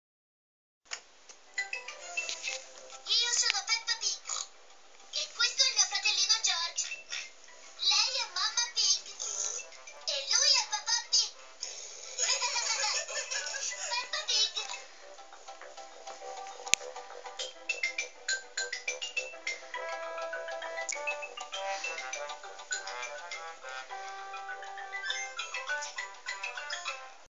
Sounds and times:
Music: 1.4s - 27.3s.

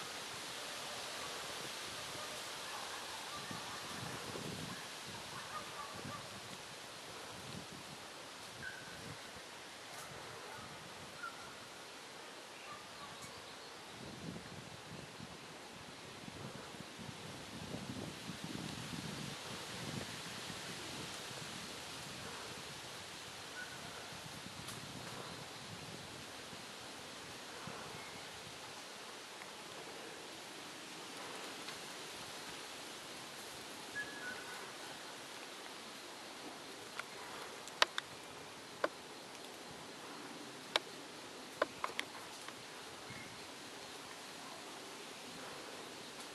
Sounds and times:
Outside, rural or natural: 0.0s - 46.3s.

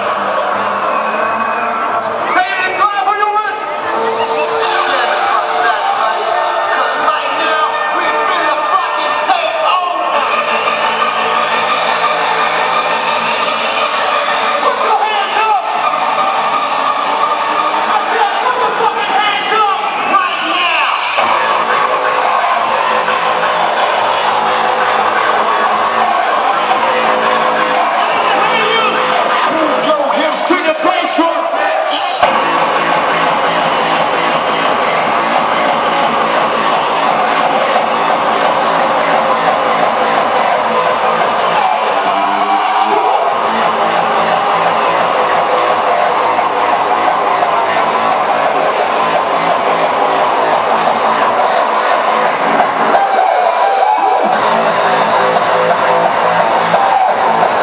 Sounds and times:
Music: 0.0s - 57.6s
Speech: 2.3s - 3.7s, 4.6s - 10.2s, 18.1s - 21.1s, 28.3s - 31.9s.

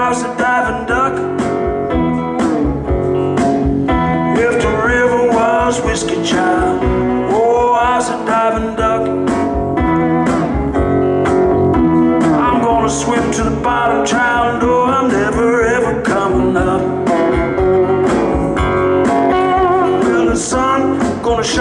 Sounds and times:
Music: 0.0s - 21.6s.

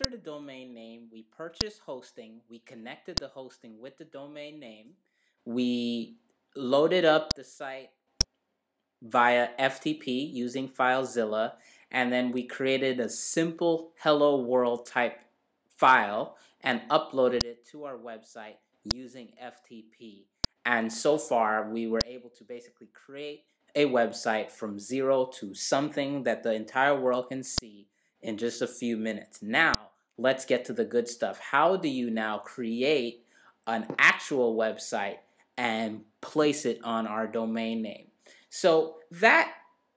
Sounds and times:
Speech: 0.0s - 4.9s, 5.5s - 8.0s, 9.0s - 39.7s.

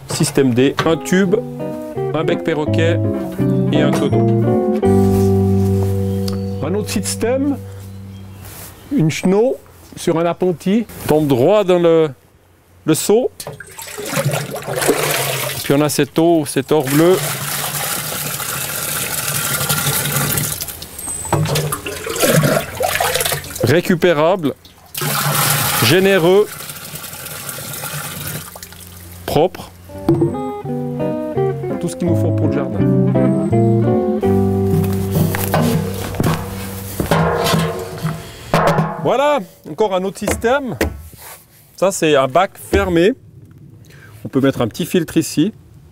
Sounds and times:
Water: 13.4s - 29.4s.

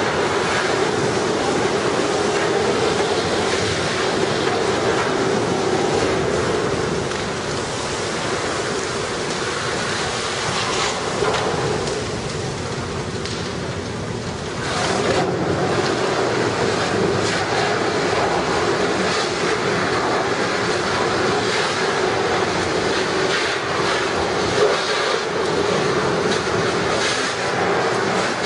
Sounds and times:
Fire: 0.0s - 28.4s.

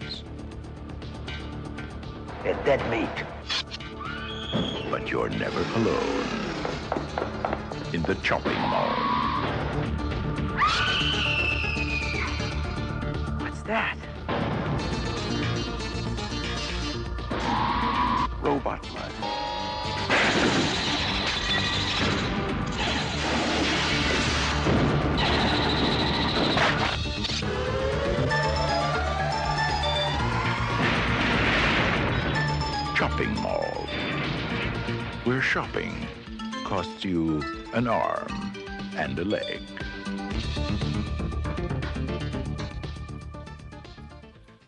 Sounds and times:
Music: 0.0s - 44.6s.

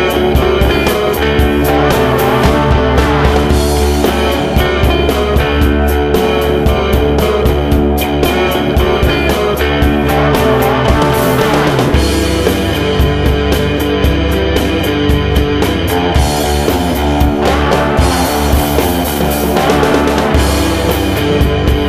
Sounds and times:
Rhythm and blues: 0.0s - 21.8s.

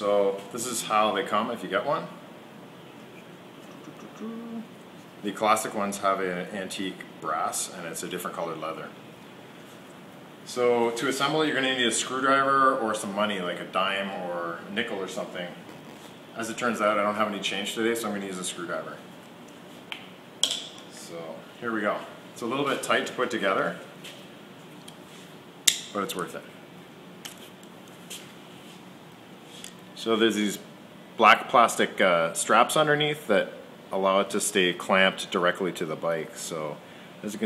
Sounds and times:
Speech: 0.0s - 2.2s, 4.2s - 9.0s, 10.5s - 15.6s, 16.4s - 19.1s, 20.9s - 23.8s, 25.9s - 26.5s, 30.0s - 37.4s.

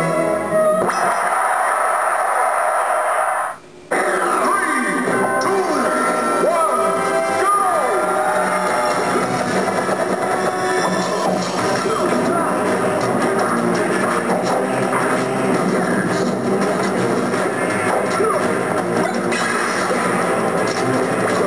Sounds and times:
Music: 0.0s - 1.2s, 3.9s - 21.4s.

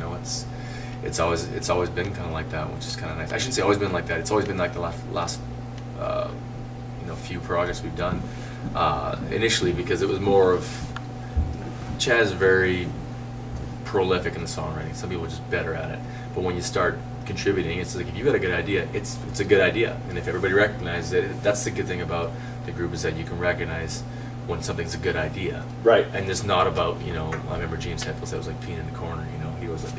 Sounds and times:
Speech: 0.0s - 6.4s, 7.0s - 10.9s, 12.0s - 13.0s, 13.8s - 29.9s.

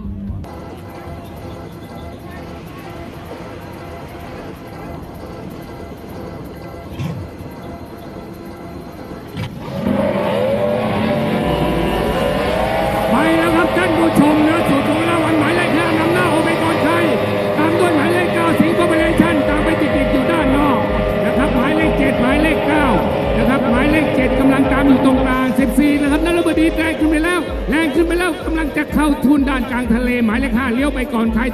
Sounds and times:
Speech: 13.0s - 31.5s.

